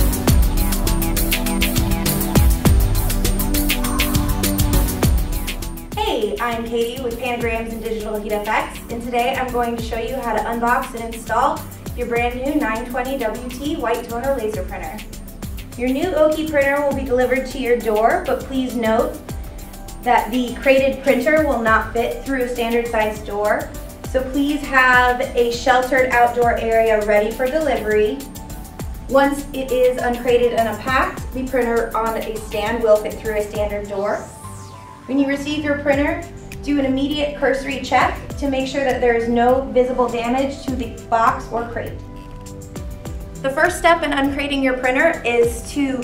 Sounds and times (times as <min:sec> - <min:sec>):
Music: 0:00.0 - 0:46.0
Speech: 0:06.0 - 0:15.0, 0:15.8 - 0:19.2, 0:20.1 - 0:28.2, 0:29.1 - 0:34.3, 0:35.1 - 0:42.0, 0:43.5 - 0:46.0.